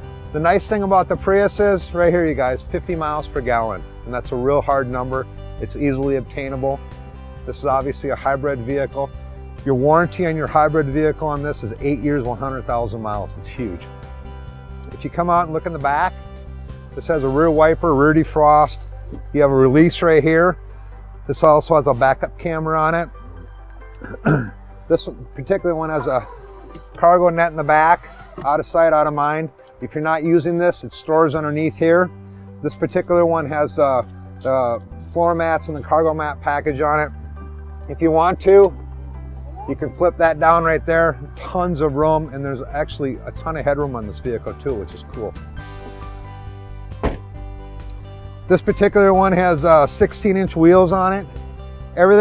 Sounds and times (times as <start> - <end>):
Music: 0.0 - 52.2
Speech: 0.4 - 6.8, 7.5 - 9.1, 9.7 - 13.8, 15.0 - 16.1, 17.0 - 18.8, 21.3 - 23.1, 24.9 - 26.3, 27.0 - 37.1, 37.9 - 38.7, 39.6 - 45.4, 48.5 - 51.3, 52.0 - 52.2.